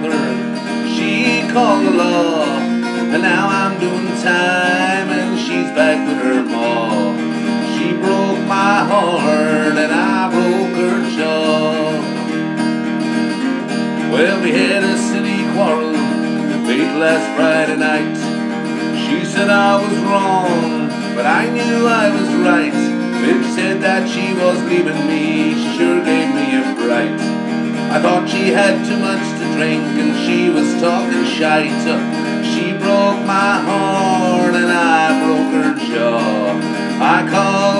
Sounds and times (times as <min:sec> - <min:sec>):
Music: 0:00.0 - 0:37.7.